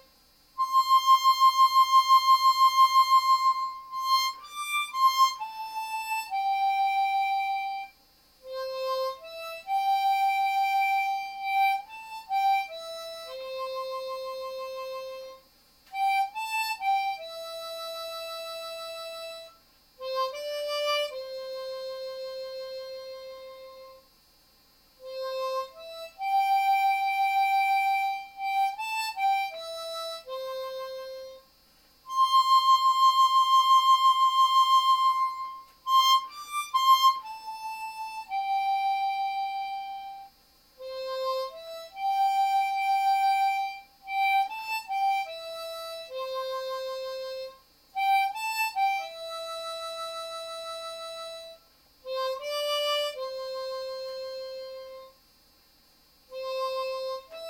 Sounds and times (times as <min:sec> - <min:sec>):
Harmonica: 0:00.0 - 0:24.1, 0:25.0 - 0:55.2, 0:56.3 - 0:57.5
Wind instrument, woodwind instrument: 0:00.0 - 0:24.1, 0:25.1 - 0:31.5, 0:32.1 - 0:55.2.